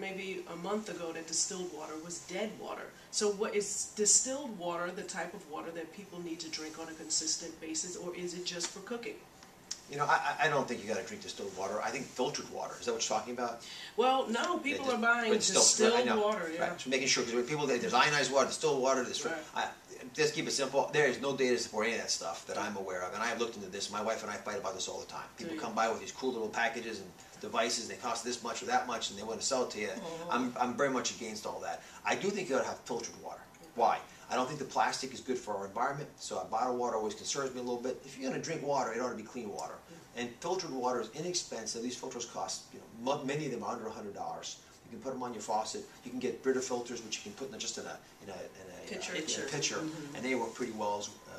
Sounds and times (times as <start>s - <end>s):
Speech: 9.9s - 33.2s, 33.8s - 51.3s.